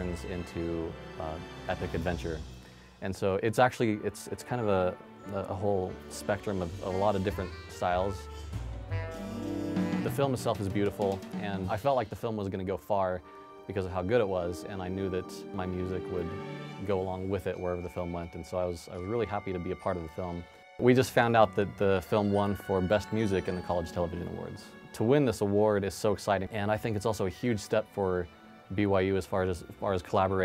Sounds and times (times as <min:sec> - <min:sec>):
Speech: 0:00.0 - 0:08.3, 0:09.9 - 0:30.4
Music: 0:00.0 - 0:30.4.